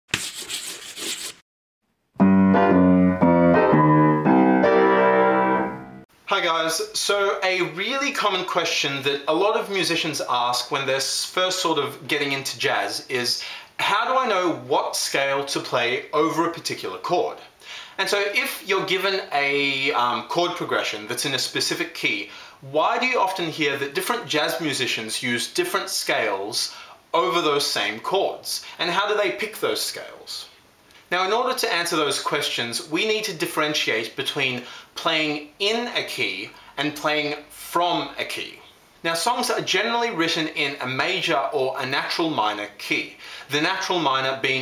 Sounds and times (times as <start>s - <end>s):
Jazz: 2.2s - 6.0s
Piano: 2.2s - 6.1s
Speech: 6.3s - 44.6s.